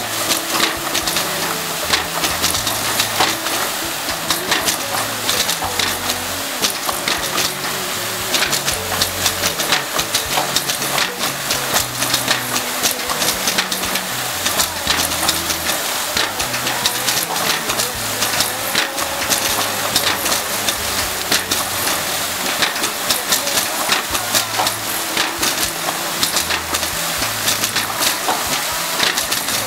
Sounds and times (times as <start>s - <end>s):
Pump (liquid): 0.0s - 29.6s
Water: 0.0s - 29.6s.